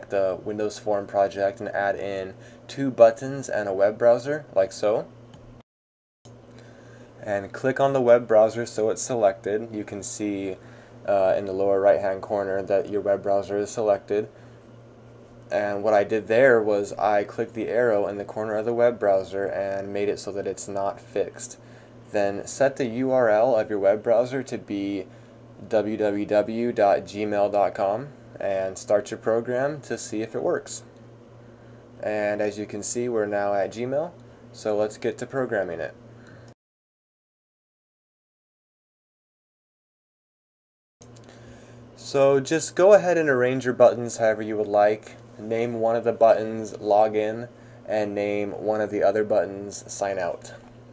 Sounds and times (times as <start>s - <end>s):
Speech: 0.0s - 5.1s, 7.2s - 14.3s, 15.5s - 30.9s, 32.0s - 36.0s, 42.0s - 50.7s.